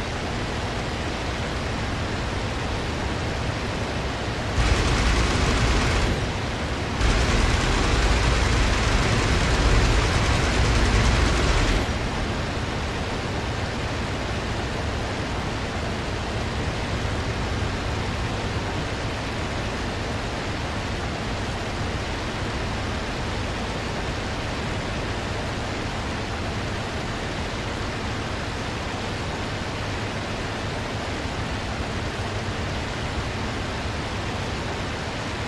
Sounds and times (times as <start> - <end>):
Fixed-wing aircraft, airplane: 0.0 - 35.4.